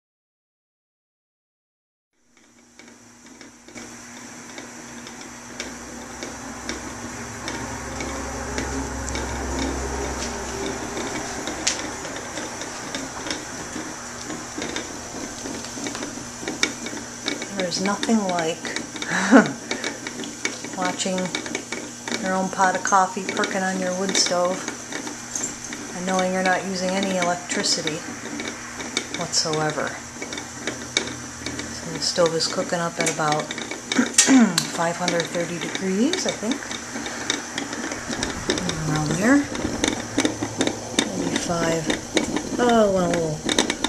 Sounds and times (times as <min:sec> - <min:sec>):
Mechanical fan: 0:02.2 - 0:43.8.